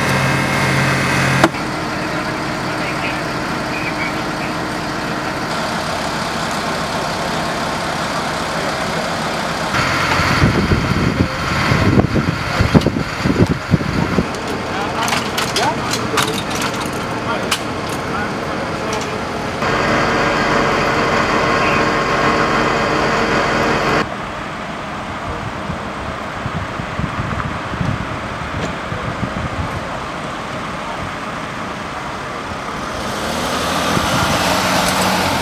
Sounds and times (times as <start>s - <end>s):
Vehicle: 0.0s - 35.4s.